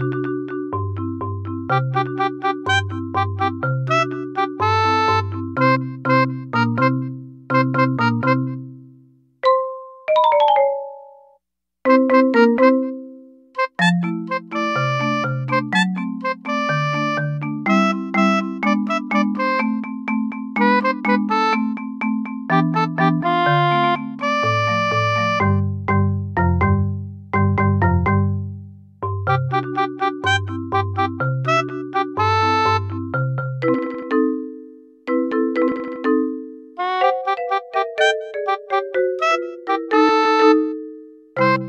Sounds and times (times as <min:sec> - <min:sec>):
Music: 0:00.0 - 0:41.6.